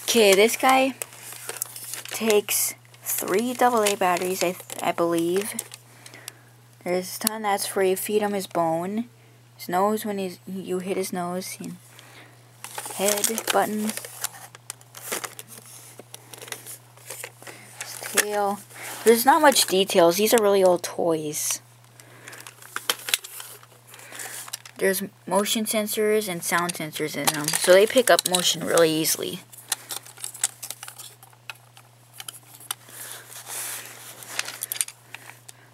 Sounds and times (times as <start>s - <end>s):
Speech: 0.1s - 1.0s, 2.2s - 5.6s, 6.8s - 11.8s, 13.0s - 14.0s, 17.9s - 21.6s, 24.8s - 29.5s.